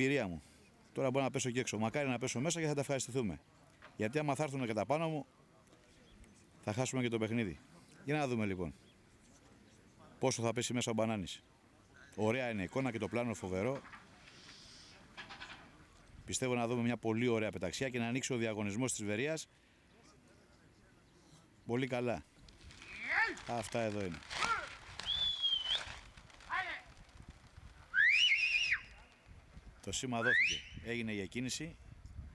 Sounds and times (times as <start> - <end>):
Speech: 0.0 - 8.8, 9.4 - 14.3, 15.6 - 22.3, 22.9 - 24.7, 26.5 - 26.9, 29.8 - 31.8
Outside, rural or natural: 0.0 - 32.3.